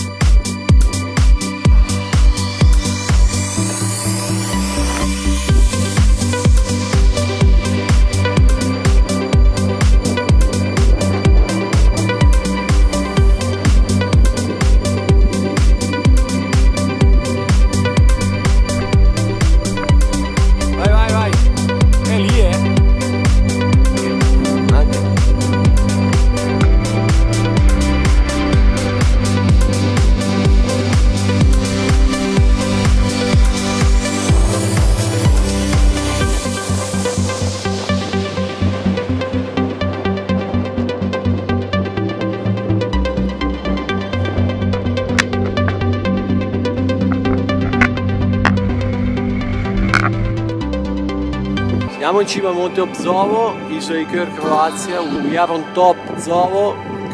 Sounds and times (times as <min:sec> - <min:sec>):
Music: 0:00.0 - 0:57.1
Speech: 0:20.8 - 0:21.4, 0:22.1 - 0:22.6, 0:24.7 - 0:25.0, 0:51.9 - 0:57.1.